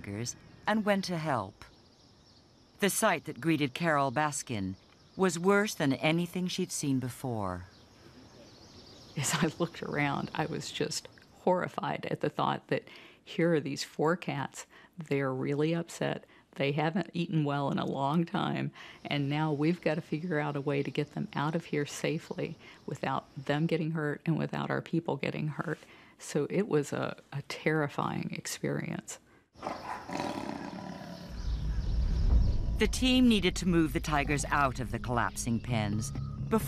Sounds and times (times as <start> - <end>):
Speech: 0.0 - 1.7, 2.8 - 7.7, 9.2 - 29.2, 32.8 - 36.6.